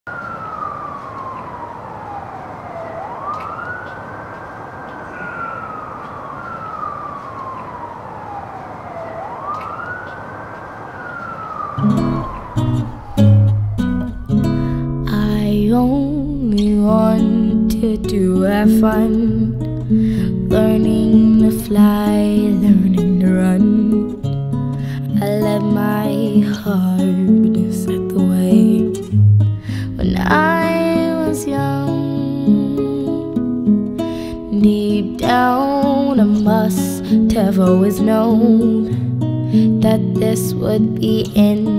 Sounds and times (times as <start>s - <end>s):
Police car (siren): 0.0s - 41.7s.